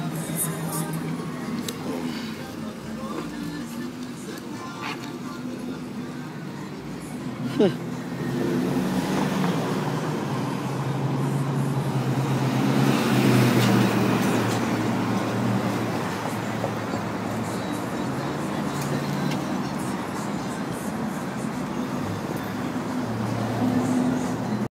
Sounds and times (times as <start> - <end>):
Music: 0.0 - 12.9, 14.0 - 24.7
Car: 0.0 - 24.7.